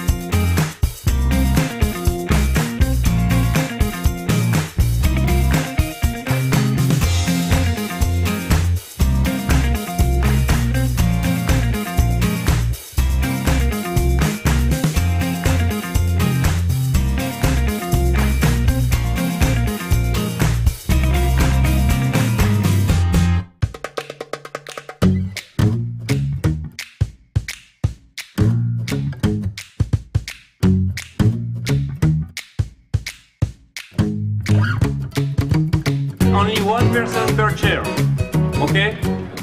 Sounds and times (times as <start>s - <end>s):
Music: 0.0s - 39.4s.